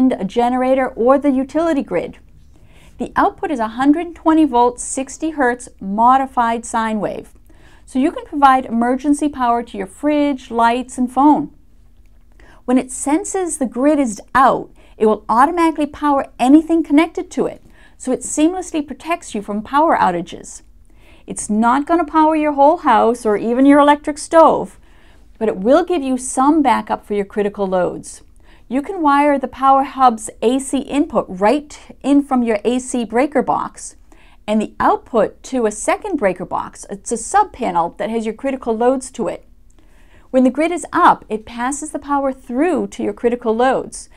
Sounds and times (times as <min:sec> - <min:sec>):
Speech: 0:00.0 - 0:02.2, 0:03.0 - 0:07.3, 0:07.9 - 0:11.6, 0:12.7 - 0:20.6, 0:21.3 - 0:24.8, 0:25.4 - 0:39.5, 0:40.3 - 0:44.1.